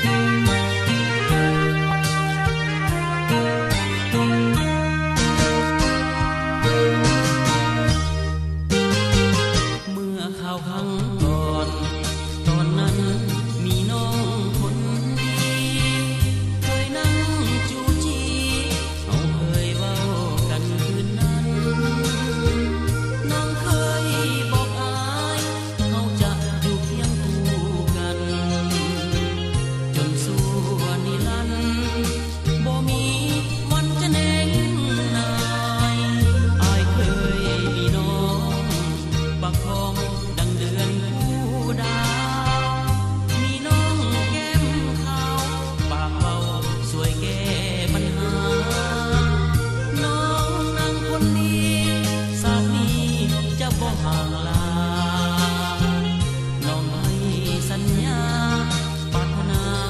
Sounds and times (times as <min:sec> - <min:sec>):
Tender music: 0:00.0 - 0:59.8.